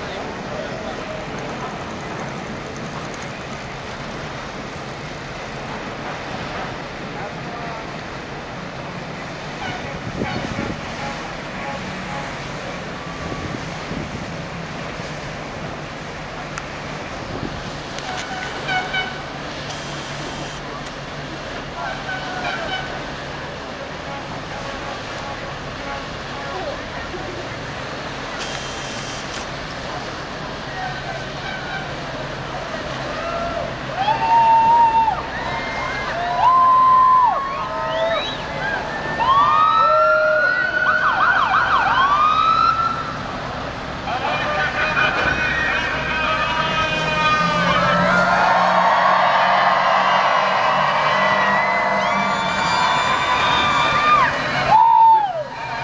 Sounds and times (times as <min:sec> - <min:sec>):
Ship: 0:00.0 - 0:55.8.